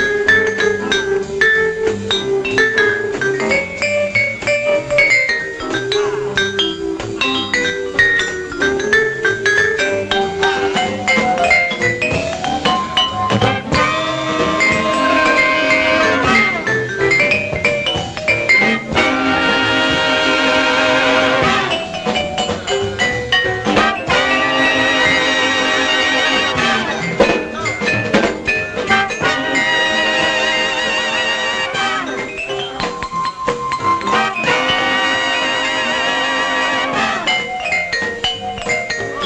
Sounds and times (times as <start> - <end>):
Jazz: 0.0 - 39.2
Percussion: 0.0 - 39.2
Trumpet: 9.8 - 17.8, 18.4 - 22.2, 23.6 - 32.8, 33.8 - 37.8.